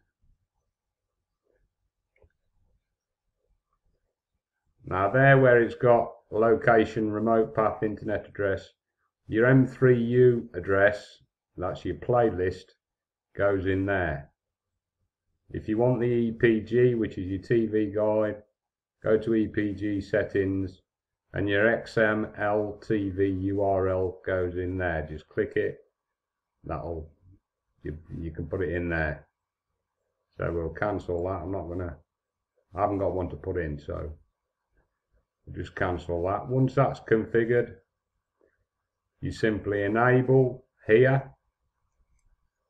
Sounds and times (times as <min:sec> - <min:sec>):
Speech: 0:04.8 - 0:12.8, 0:13.4 - 0:14.4, 0:15.5 - 0:25.9, 0:26.6 - 0:27.2, 0:27.8 - 0:29.4, 0:30.4 - 0:32.1, 0:32.7 - 0:34.2, 0:35.5 - 0:37.8, 0:39.2 - 0:41.4.